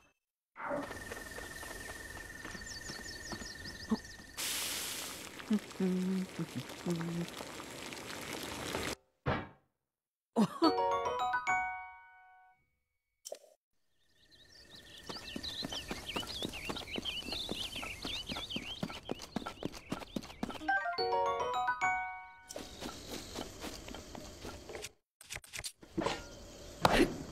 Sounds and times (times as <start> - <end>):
Music: 10.7 - 12.6, 20.6 - 22.6.